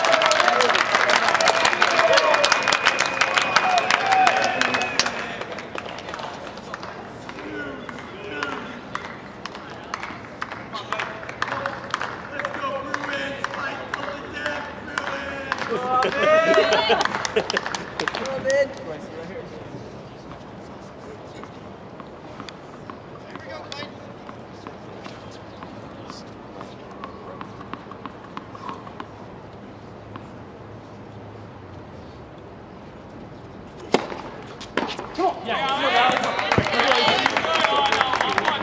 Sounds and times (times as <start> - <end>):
Outside, urban or manmade: 0.0 - 38.6.